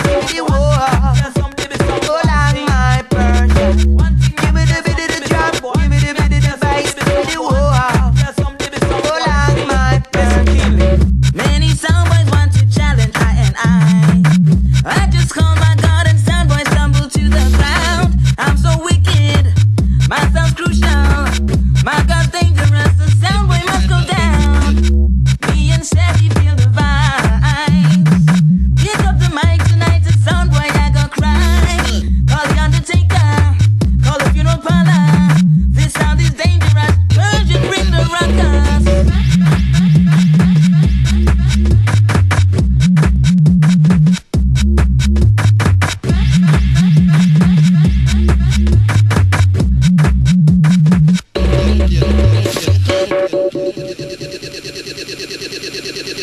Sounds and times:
Scratching (performance technique): 0.0 - 56.2.

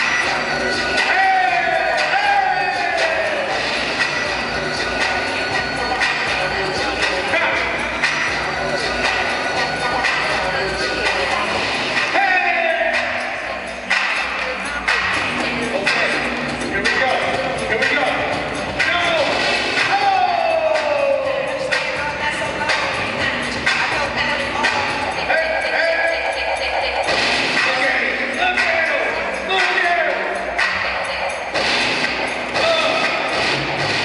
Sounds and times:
Music: 0.0 - 34.0.

